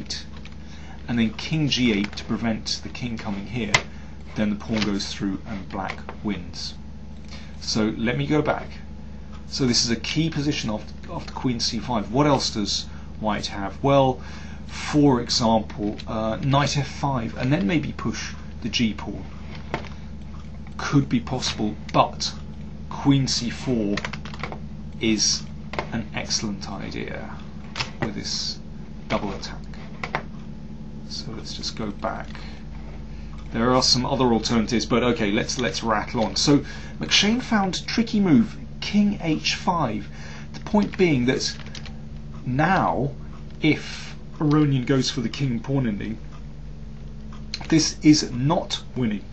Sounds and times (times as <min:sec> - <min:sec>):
Speech: 0:00.0 - 0:00.3, 0:01.0 - 0:06.8, 0:07.6 - 0:08.9, 0:09.5 - 0:19.3, 0:20.8 - 0:24.1, 0:25.0 - 0:29.8, 0:31.1 - 0:32.6, 0:33.5 - 0:41.8, 0:42.4 - 0:46.2, 0:47.6 - 0:49.3
Inside, small room: 0:00.0 - 0:49.3.